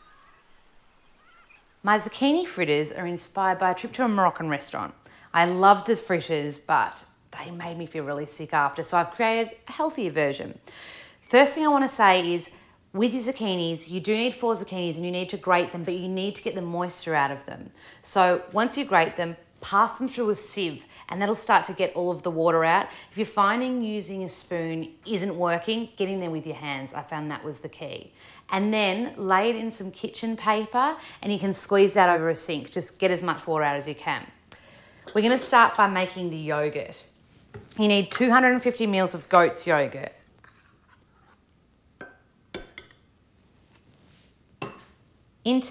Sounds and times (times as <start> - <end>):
Speech: 1.8 - 10.6, 11.3 - 34.4, 35.1 - 37.1, 37.8 - 40.2, 45.5 - 45.7.